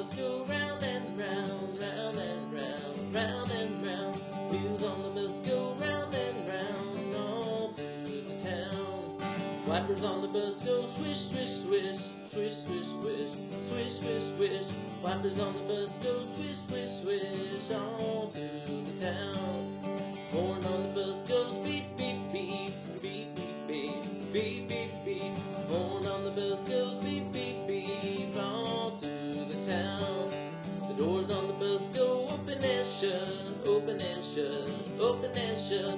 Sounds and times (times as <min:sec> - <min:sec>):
Music: 0:00.0 - 0:35.9.